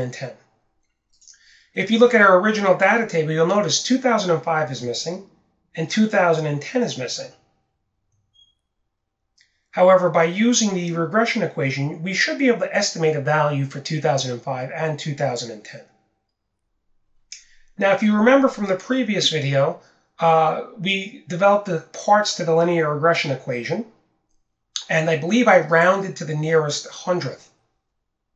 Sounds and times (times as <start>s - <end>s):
Speech: 0.0s - 0.4s, 1.8s - 7.4s, 9.8s - 15.9s, 17.8s - 23.9s, 24.8s - 27.5s.